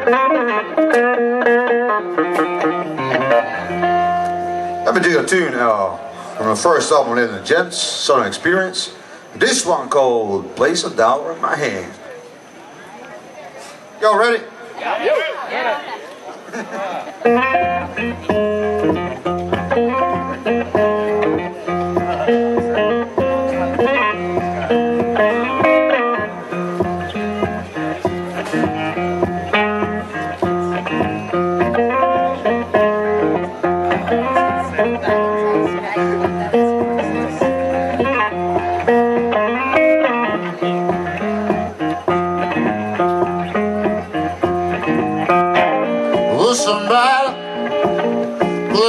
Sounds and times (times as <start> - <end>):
Music: 0.0 - 7.3, 17.2 - 48.8.